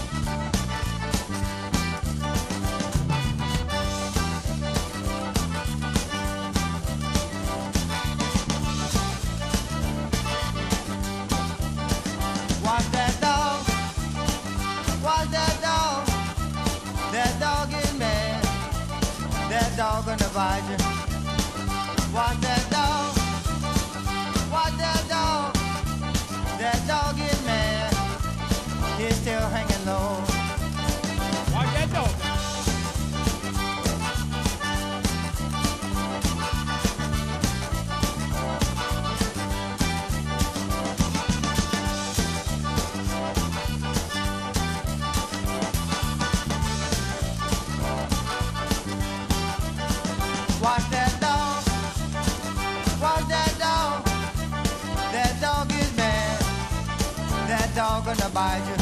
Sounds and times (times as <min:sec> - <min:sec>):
Music: 0:00.0 - 0:58.8.